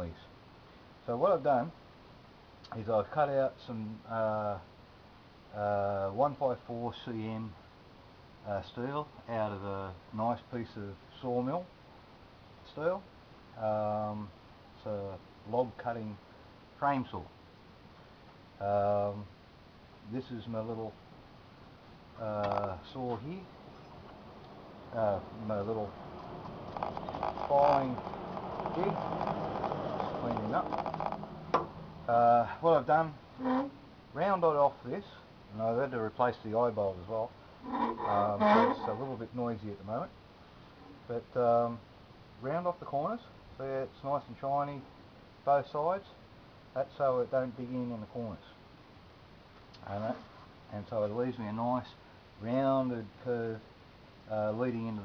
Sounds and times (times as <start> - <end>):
Speech: 0.0 - 0.3, 1.0 - 1.8, 2.7 - 4.7, 5.5 - 7.6, 8.4 - 11.7, 12.6 - 16.2, 16.8 - 17.3, 18.6 - 19.4, 20.0 - 21.0, 22.2 - 23.5, 24.9 - 26.0, 27.4 - 28.0, 28.7 - 29.0, 30.0 - 30.8, 32.1 - 33.2, 34.2 - 37.4, 38.0 - 40.2, 41.1 - 41.8, 42.4 - 44.9, 45.5 - 46.2, 46.8 - 48.6, 49.8 - 53.7, 54.3 - 55.0.